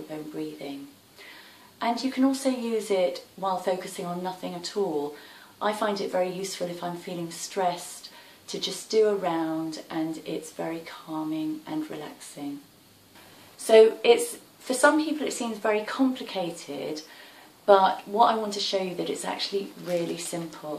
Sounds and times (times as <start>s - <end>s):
Speech: 0.0s - 0.9s, 1.8s - 12.7s, 13.6s - 17.1s, 17.7s - 20.7s.